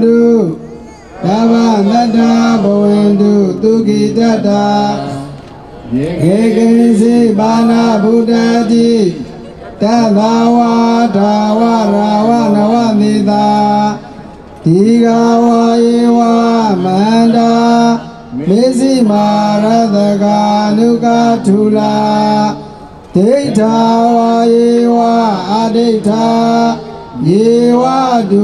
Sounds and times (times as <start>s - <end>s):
Mantra: 0.0s - 28.4s.